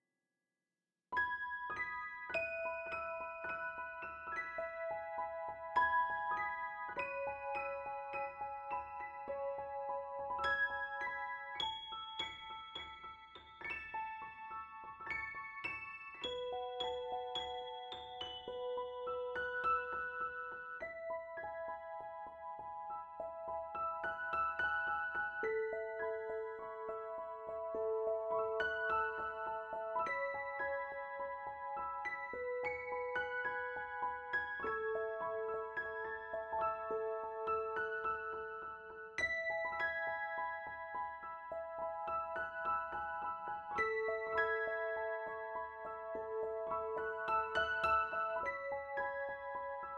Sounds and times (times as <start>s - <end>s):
Music: 1.1s - 49.9s.